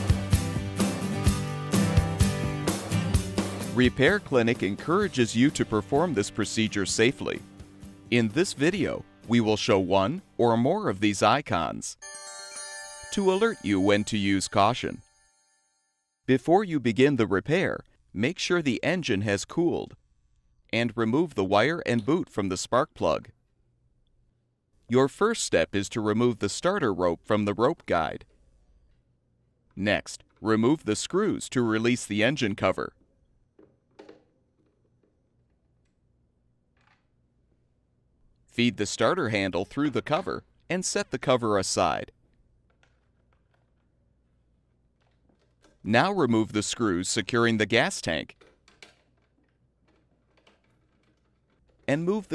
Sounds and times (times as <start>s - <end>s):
Music: 0.0s - 11.1s, 12.0s - 16.2s
Speech: 3.7s - 7.4s, 8.1s - 12.0s, 13.1s - 15.0s, 16.3s - 20.0s, 20.7s - 23.3s, 24.9s - 28.3s, 29.8s - 33.0s, 38.6s - 42.1s, 45.9s - 48.4s, 51.9s - 52.3s.